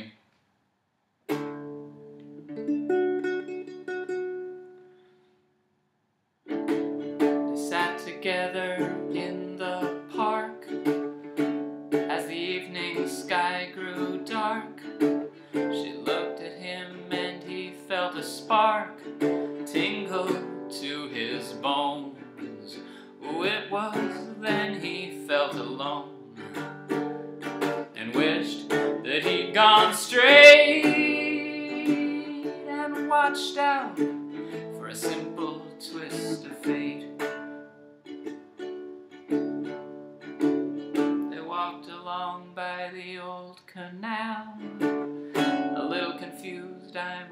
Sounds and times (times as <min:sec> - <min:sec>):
Acoustic guitar: 0:01.3 - 0:05.2, 0:06.5 - 0:47.3.